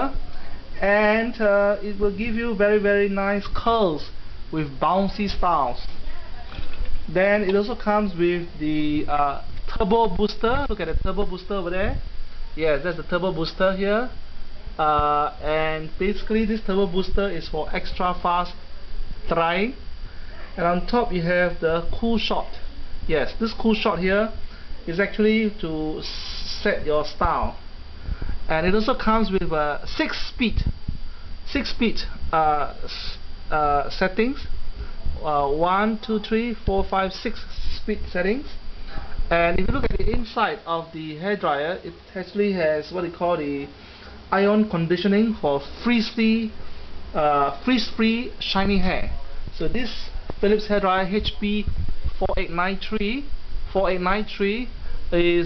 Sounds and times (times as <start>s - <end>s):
Speech: 0.0s - 27.6s, 28.5s - 30.8s, 31.5s - 34.5s, 35.2s - 55.4s.